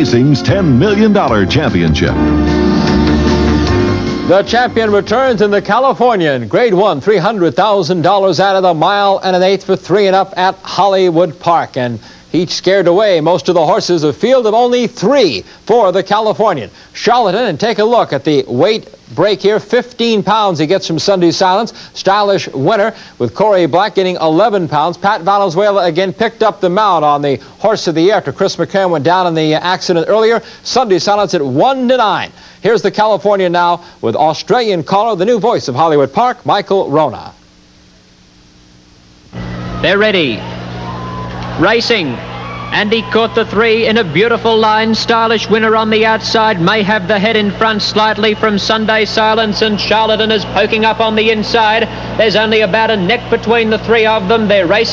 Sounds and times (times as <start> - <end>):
Speech: 0.0 - 2.2, 4.3 - 37.4, 39.8 - 40.4, 41.6 - 42.2, 42.8 - 54.9.